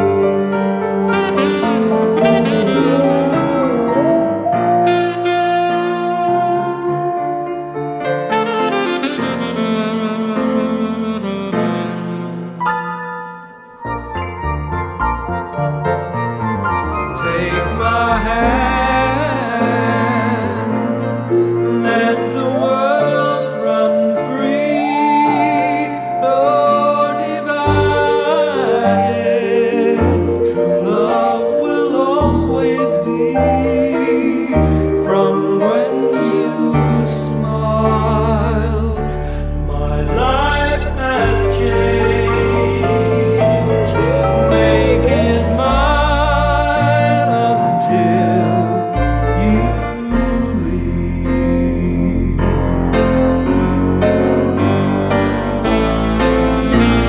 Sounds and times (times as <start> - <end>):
Music: 0.0 - 57.0.